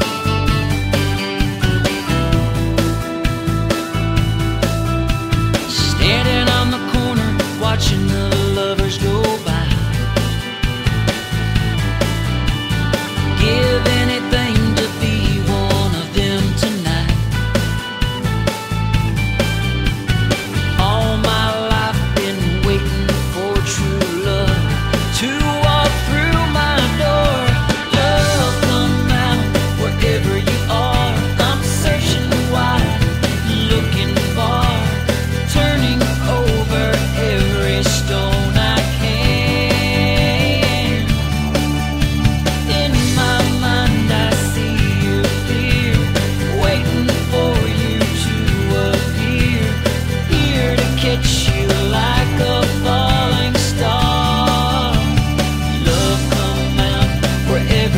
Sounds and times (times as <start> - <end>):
Music: 0.0 - 57.9.